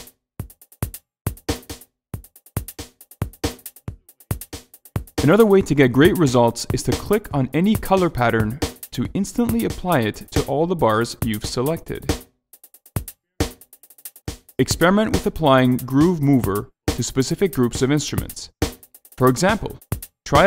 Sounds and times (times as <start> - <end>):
Music: 0.0 - 20.4
Speech: 5.2 - 12.1, 14.6 - 18.5, 19.2 - 20.4.